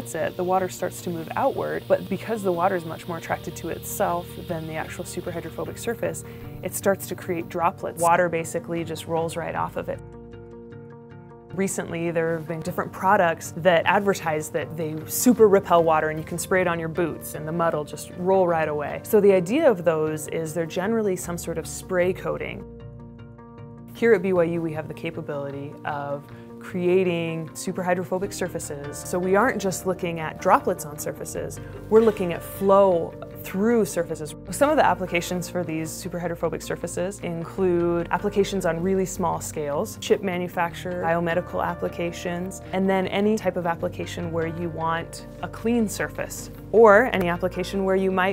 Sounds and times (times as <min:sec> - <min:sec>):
Speech: 0:00.0 - 0:10.0, 0:11.6 - 0:22.6, 0:24.0 - 0:48.3
Music: 0:00.0 - 0:48.3.